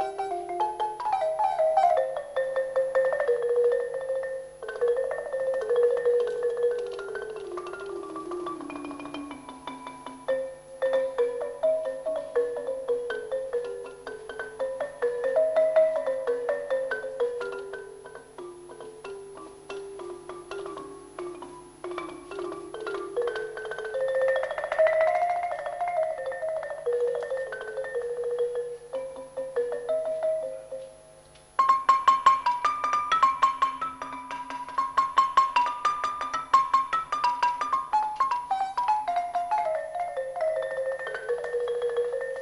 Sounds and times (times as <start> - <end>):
Percussion: 0.0 - 42.4.